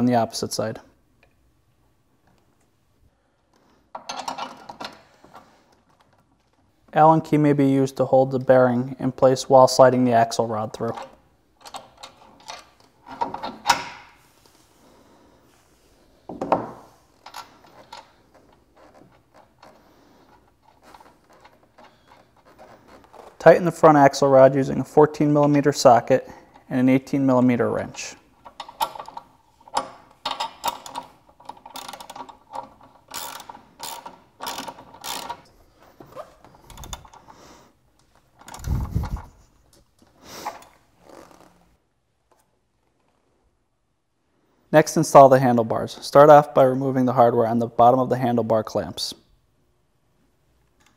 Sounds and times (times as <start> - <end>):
Gears: 28.5 - 35.5.